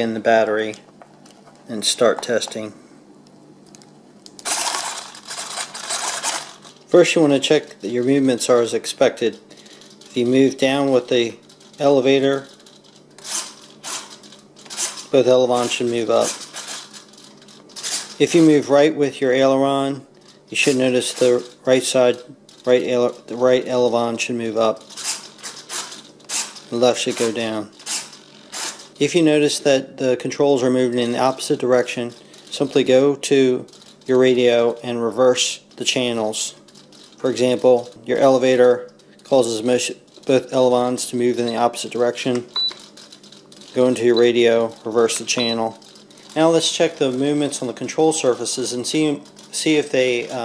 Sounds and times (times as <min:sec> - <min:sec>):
Speech: 0:00.0 - 0:00.8, 0:01.7 - 0:02.8, 0:06.9 - 0:09.4, 0:10.1 - 0:12.5, 0:15.1 - 0:16.4, 0:18.2 - 0:24.8, 0:26.7 - 0:27.8, 0:29.0 - 0:36.6, 0:37.2 - 0:42.5, 0:43.8 - 0:45.8, 0:46.4 - 0:50.4
Inside, small room: 0:00.0 - 0:50.4.